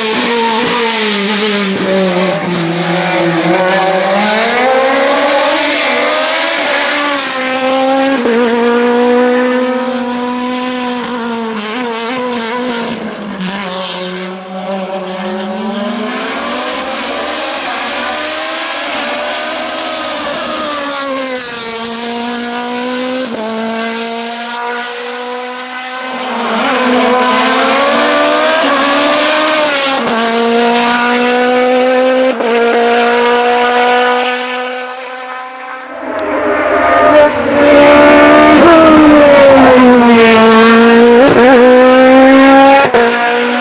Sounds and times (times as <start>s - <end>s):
Race car, auto racing: 0.0s - 43.6s.